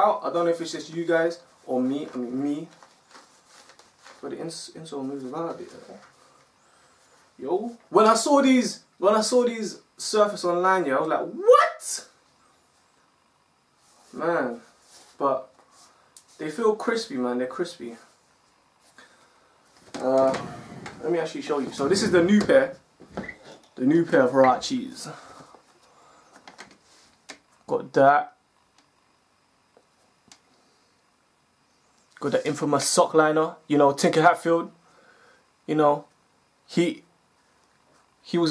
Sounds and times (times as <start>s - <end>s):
Speech: 0.0s - 2.8s, 4.2s - 6.1s, 7.4s - 12.2s, 14.1s - 15.5s, 16.4s - 18.1s, 20.0s - 20.4s, 21.0s - 22.8s, 23.8s - 25.2s, 27.7s - 28.4s, 32.2s - 34.8s, 35.7s - 36.1s, 36.7s - 37.1s, 38.2s - 38.5s
Inside, small room: 0.0s - 38.5s.